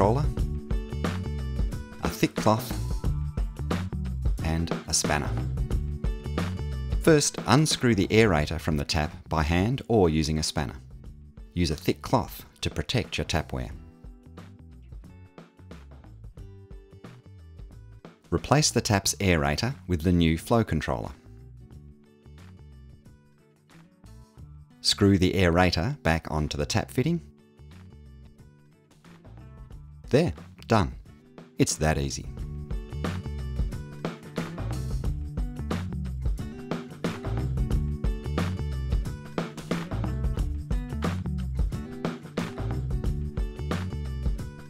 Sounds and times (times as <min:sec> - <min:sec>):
Speech: 0:00.0 - 0:00.4, 0:02.0 - 0:02.9, 0:04.4 - 0:05.4, 0:07.0 - 0:10.8, 0:11.6 - 0:13.8, 0:18.3 - 0:21.2, 0:24.8 - 0:27.3, 0:30.1 - 0:31.0, 0:31.6 - 0:32.3
Music: 0:00.0 - 0:44.6.